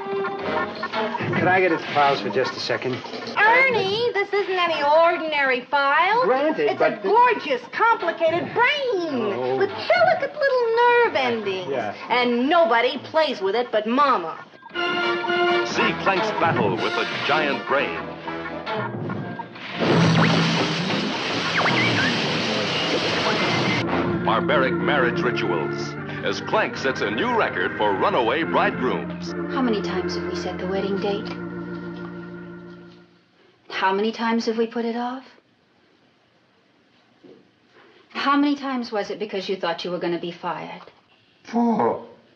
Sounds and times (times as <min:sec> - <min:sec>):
Music: 0:00.0 - 0:04.0, 0:14.6 - 0:33.3.